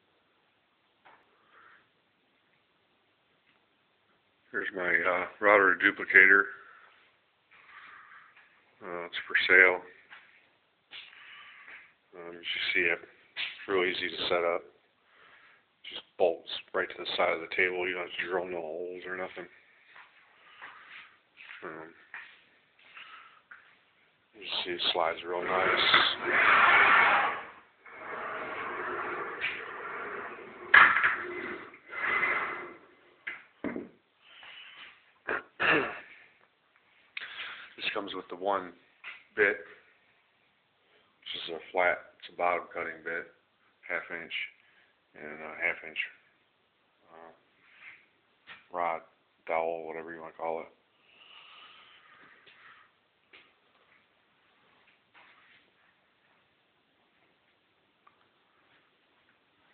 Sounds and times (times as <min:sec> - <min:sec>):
Speech: 0:04.5 - 0:06.7, 0:08.8 - 0:10.0, 0:12.1 - 0:14.8, 0:15.8 - 0:19.6, 0:21.5 - 0:22.0, 0:24.4 - 0:26.4, 0:37.8 - 0:38.8, 0:39.4 - 0:39.8, 0:41.2 - 0:46.3, 0:47.0 - 0:47.4, 0:48.7 - 0:50.8.